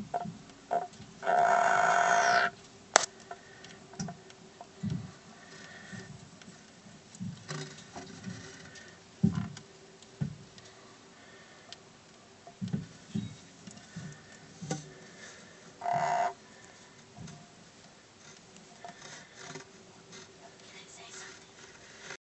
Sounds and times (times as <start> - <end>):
Speech: 20.6 - 21.6.